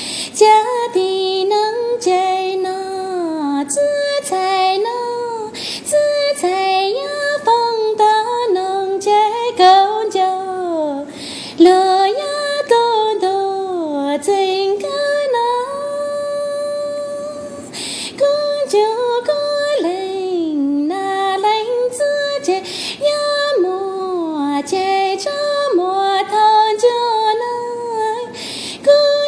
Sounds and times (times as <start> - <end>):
Female singing: 0.4 - 29.2.